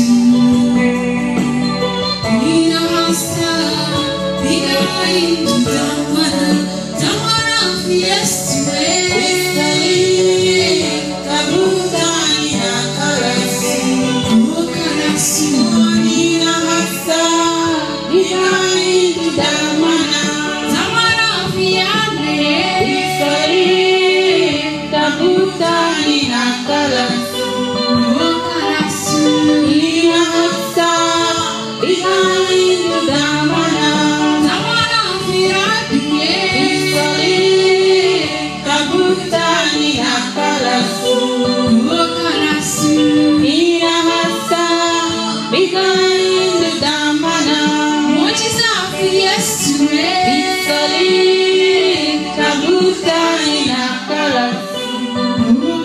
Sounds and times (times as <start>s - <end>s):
Gospel music: 0.0s - 55.8s.